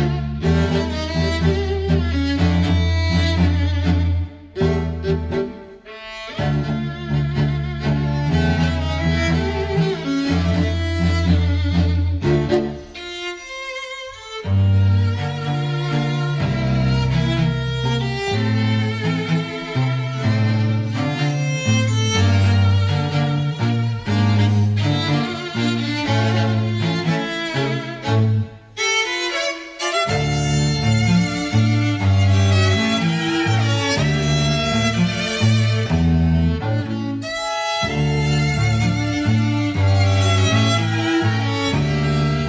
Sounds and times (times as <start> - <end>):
Cello: 0.0 - 42.4
String section: 0.0 - 42.4
Violin, fiddle: 0.0 - 42.4.